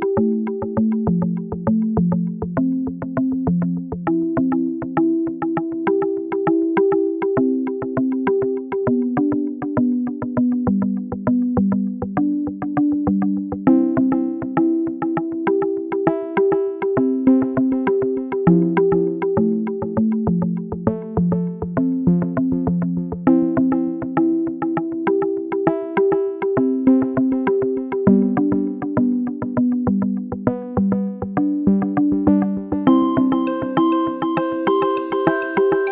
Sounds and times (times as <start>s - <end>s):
Music: 0.0s - 35.9s.